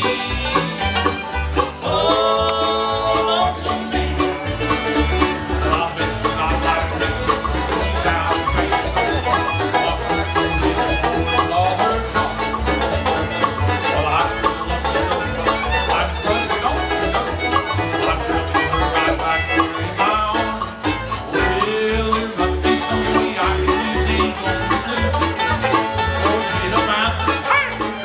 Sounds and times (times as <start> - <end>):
Bluegrass: 0.0 - 28.0.